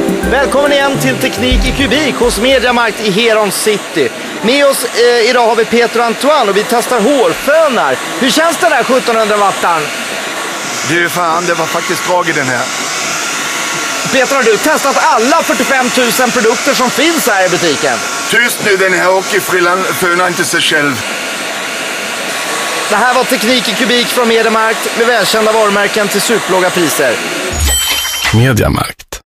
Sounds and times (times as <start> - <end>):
Speech: 0.2 - 9.9, 10.8 - 12.7, 14.1 - 21.0, 22.9 - 27.2, 28.3 - 29.2.